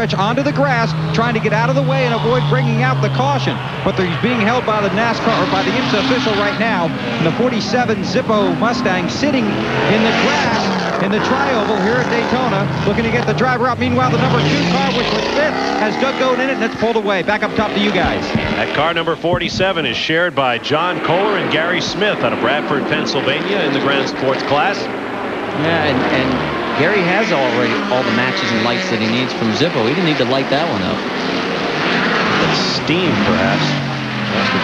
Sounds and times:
Medium engine (mid frequency): 0.0s - 19.6s, 20.6s - 34.6s
Speech: 0.0s - 24.9s, 25.6s - 31.0s, 32.3s - 34.6s
Car: 0.0s - 34.6s
Accelerating, revving, vroom: 8.6s - 16.8s, 25.5s - 34.6s.

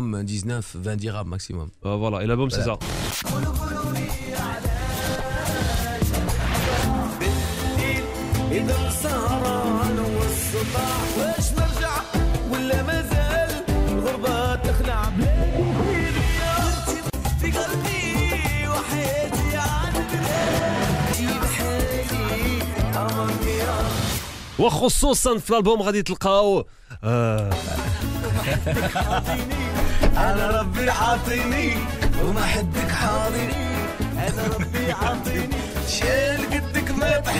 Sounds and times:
Speech: 0.0s - 2.8s, 24.6s - 27.6s
Music: 2.8s - 24.6s, 27.4s - 37.3s.

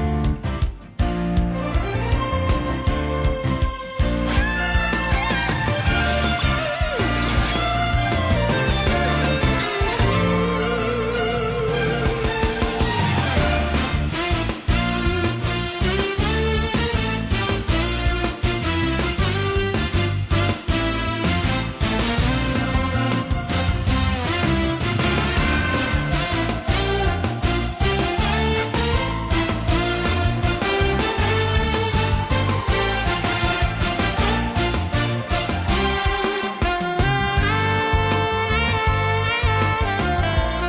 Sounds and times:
Music: 0.0s - 40.6s.

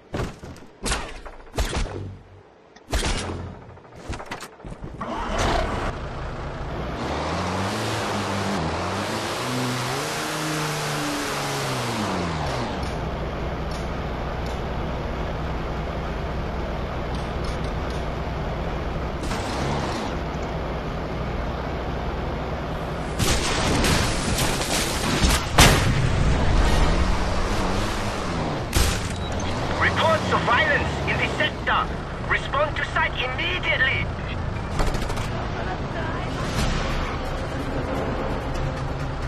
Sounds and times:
Truck: 0.0s - 39.2s
Speech: 29.8s - 34.4s.

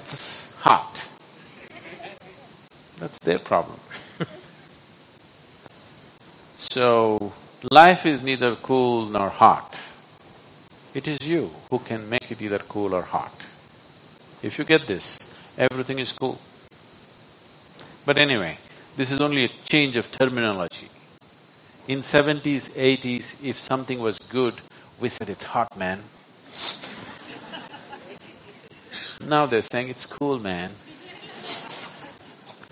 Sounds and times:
Speech: 0.0s - 1.2s, 3.0s - 3.9s, 6.6s - 10.0s, 11.0s - 13.6s, 14.4s - 16.4s, 18.1s - 20.9s, 21.9s - 26.1s, 29.2s - 31.3s.

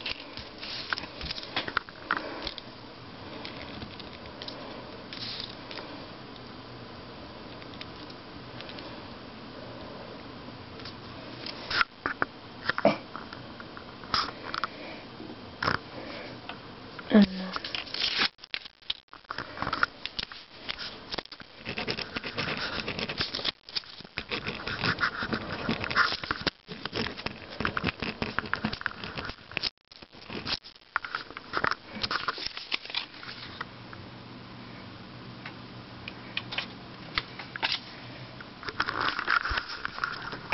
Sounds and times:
Inside, small room: 0.0s - 40.5s.

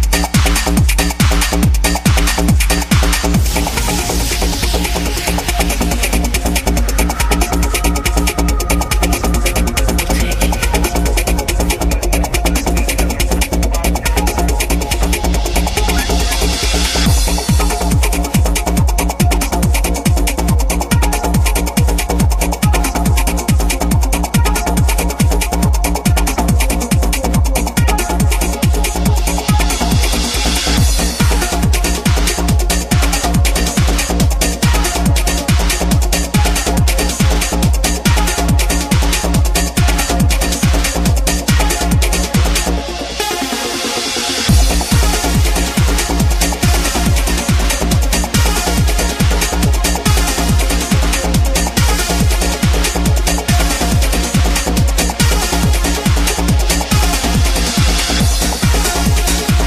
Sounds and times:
Trance music: 0.0s - 59.6s.

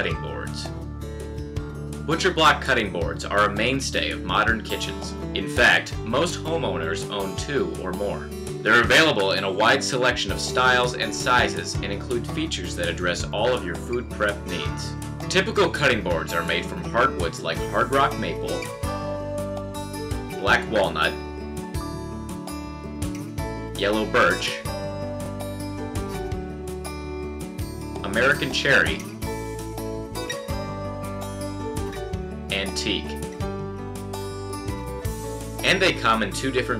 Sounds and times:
Speech: 0.0s - 0.7s, 2.1s - 18.7s, 20.4s - 21.2s, 23.8s - 24.6s, 28.0s - 29.1s, 32.5s - 33.2s, 35.6s - 36.7s
Music: 0.0s - 36.7s.

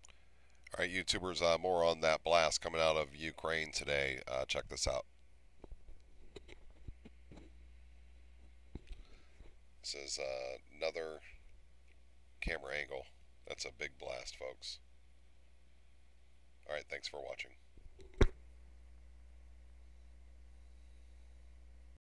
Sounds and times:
Speech: 0.7s - 5.1s, 9.8s - 11.4s, 12.4s - 14.8s, 16.6s - 17.6s.

